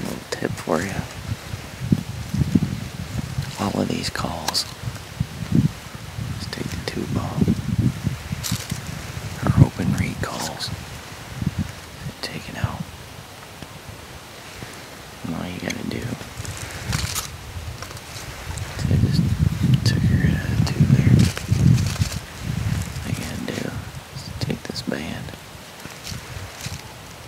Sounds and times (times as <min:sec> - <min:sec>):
Speech: 0:00.0 - 0:01.1, 0:03.5 - 0:04.7, 0:06.4 - 0:07.5, 0:09.4 - 0:10.7, 0:12.2 - 0:12.9, 0:15.2 - 0:16.2, 0:18.8 - 0:21.2, 0:23.0 - 0:25.4.